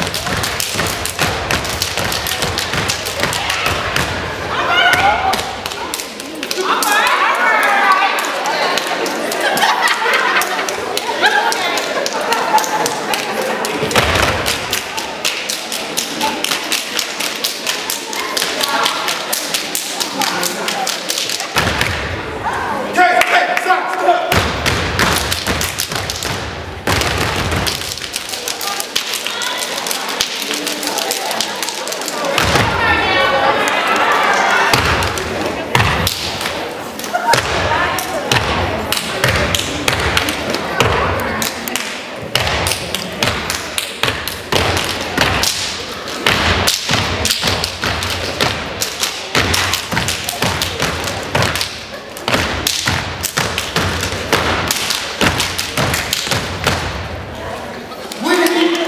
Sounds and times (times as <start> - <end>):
Inside, large room or hall: 0.0 - 58.8
Speech: 22.4 - 24.4, 28.3 - 35.8, 57.3 - 58.8.